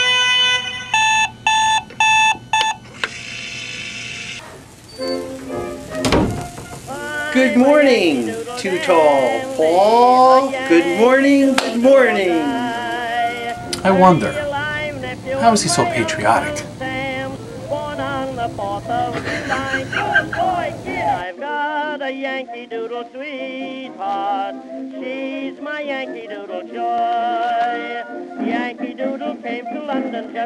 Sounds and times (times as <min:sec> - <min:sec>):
Music: 0:00.0 - 0:01.5, 0:04.8 - 0:30.4
Speech: 0:07.4 - 0:12.8, 0:13.8 - 0:14.4, 0:15.4 - 0:16.7.